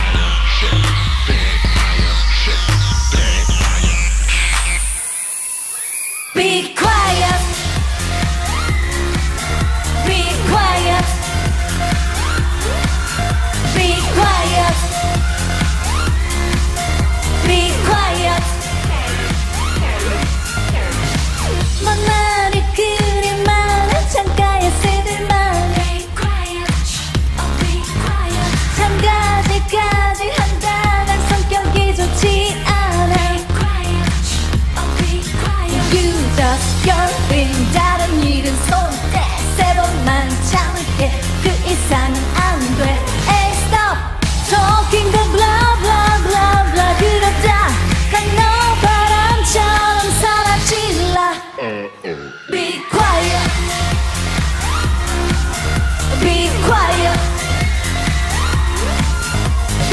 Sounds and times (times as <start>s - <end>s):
Music: 0.0s - 51.6s, 52.6s - 59.9s.